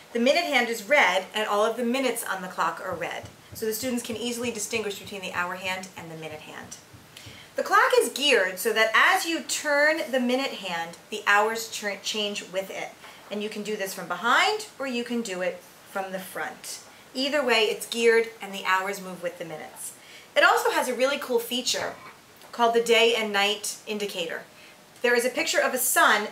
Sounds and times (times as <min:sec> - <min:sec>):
Speech: 0:00.1 - 0:06.8, 0:07.6 - 0:26.3.